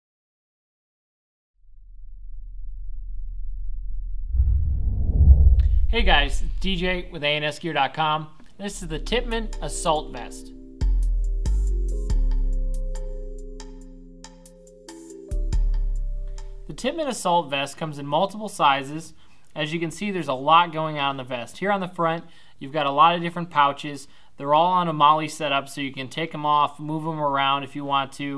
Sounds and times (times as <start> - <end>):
Silence: 1.6 - 7.2
Speech: 5.9 - 10.5, 16.7 - 28.3
Music: 8.7 - 17.2.